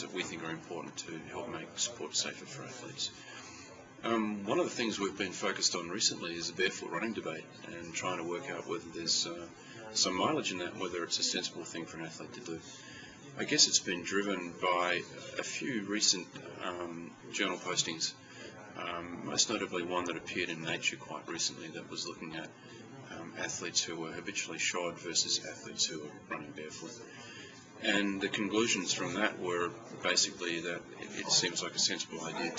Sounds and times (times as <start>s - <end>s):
Speech: 0.0s - 32.5s.